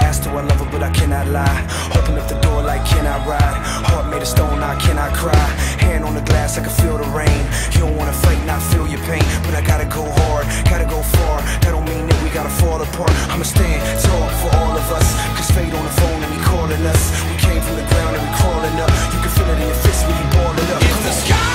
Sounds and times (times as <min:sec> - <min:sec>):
Music: 0:00.0 - 0:21.5.